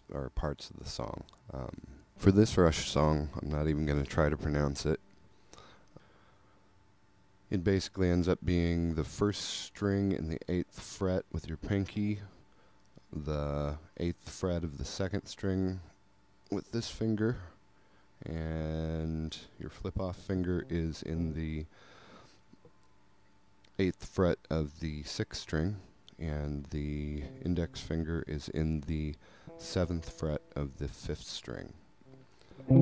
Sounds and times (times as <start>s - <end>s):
Speech: 0.0s - 5.0s, 7.5s - 12.4s, 13.0s - 17.6s, 18.2s - 21.7s, 23.7s - 31.8s.